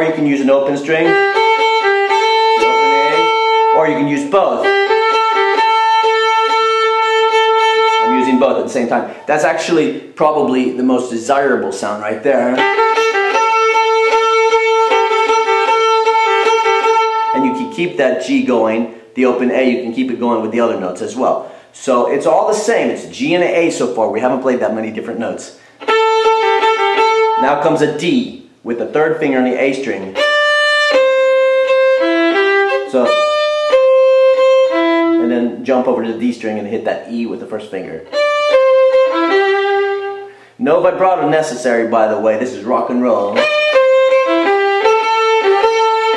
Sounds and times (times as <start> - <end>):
Speech: 0.0 - 1.2, 2.2 - 4.7, 8.1 - 12.6, 17.4 - 25.6, 27.4 - 30.2, 32.8 - 33.2, 35.2 - 38.1, 40.6 - 43.5
Violin, fiddle: 0.0 - 9.2, 12.4 - 18.7, 25.8 - 27.8, 29.7 - 36.6, 38.0 - 46.1.